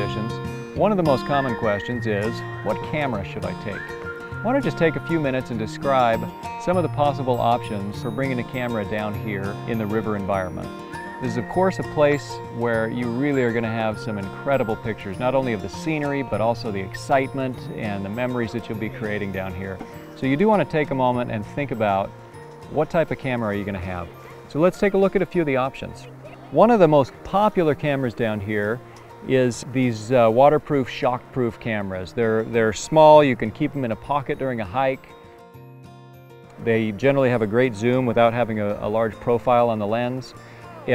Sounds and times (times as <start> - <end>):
Speech: 0.0 - 3.8, 4.5 - 22.1, 22.7 - 35.1, 36.6 - 40.9
Music: 0.0 - 40.9.